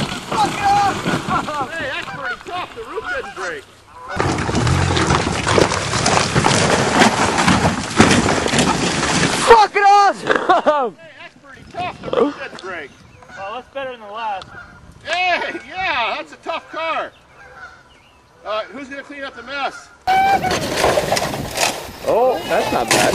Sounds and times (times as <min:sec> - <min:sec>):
Turkey: 0:17.4 - 0:17.9.